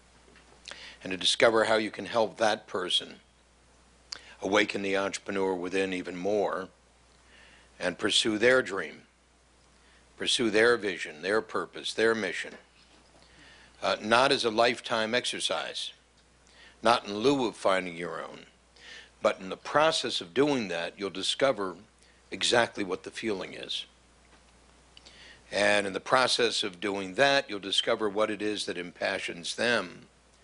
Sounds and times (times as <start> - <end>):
Speech: 1.0 - 3.2, 4.4 - 6.8, 7.8 - 9.1, 10.2 - 12.6, 13.8 - 16.0, 16.8 - 18.5, 19.2 - 24.0, 25.5 - 30.1.